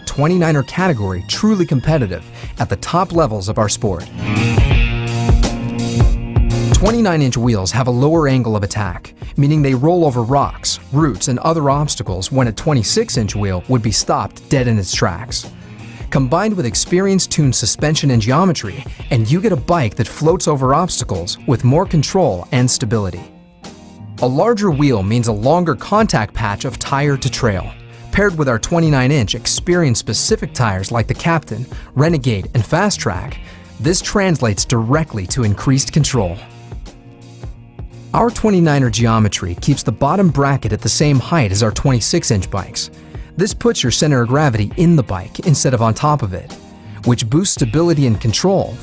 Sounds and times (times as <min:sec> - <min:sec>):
Speech: 0:00.0 - 0:04.1, 0:06.7 - 0:15.5, 0:16.1 - 0:23.3, 0:24.2 - 0:36.5, 0:38.1 - 0:48.8
Music: 0:00.0 - 0:48.8.